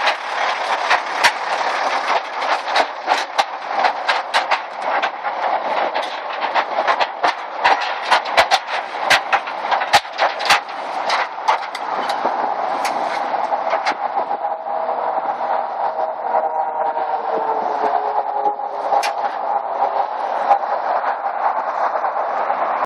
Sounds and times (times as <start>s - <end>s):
Vehicle: 0.0s - 22.8s.